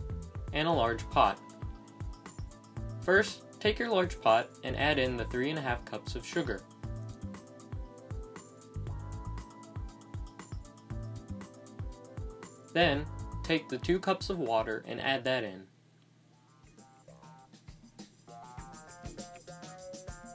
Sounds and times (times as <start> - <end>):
Music: 0.0 - 15.1, 16.3 - 20.3
Speech: 0.6 - 1.4, 3.1 - 6.6, 12.8 - 15.7.